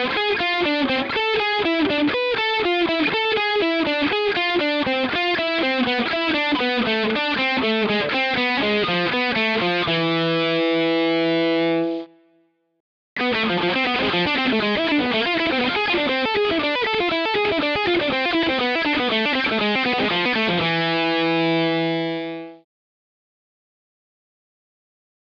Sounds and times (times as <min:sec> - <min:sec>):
Electric guitar: 0:00.0 - 0:12.4, 0:13.2 - 0:22.7.